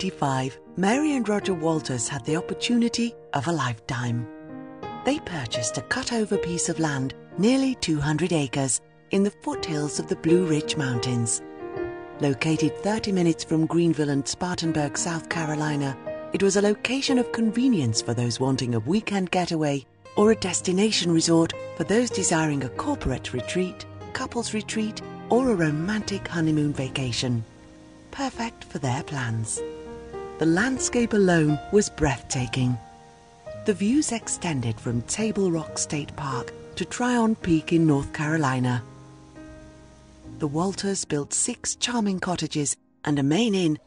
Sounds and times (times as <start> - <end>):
Speech: 0.0 - 4.3, 5.1 - 11.4, 12.2 - 27.4, 28.2 - 29.6, 30.4 - 32.8, 33.7 - 38.8, 40.4 - 43.8
Music: 0.0 - 43.8.